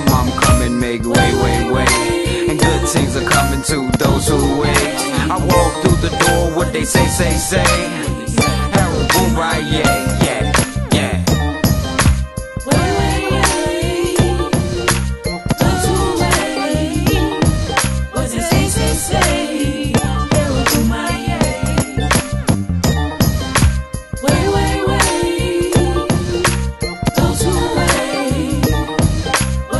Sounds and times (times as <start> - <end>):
Singing: 0.0 - 11.3, 12.7 - 14.5, 18.1 - 21.8, 24.2 - 26.2
Music: 0.0 - 29.7.